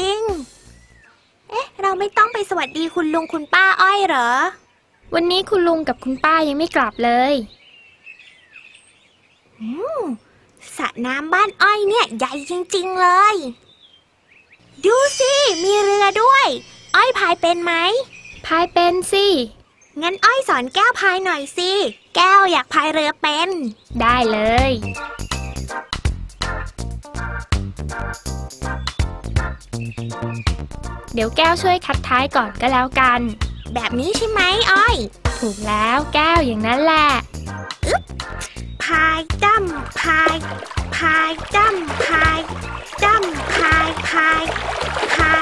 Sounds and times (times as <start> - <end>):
Child speech, kid speaking: 0.0 - 0.5, 1.5 - 7.6, 9.6 - 13.6, 14.8 - 25.0, 31.1 - 37.3, 38.8 - 45.4
Music: 0.0 - 1.0, 14.8 - 17.7, 23.9 - 45.4.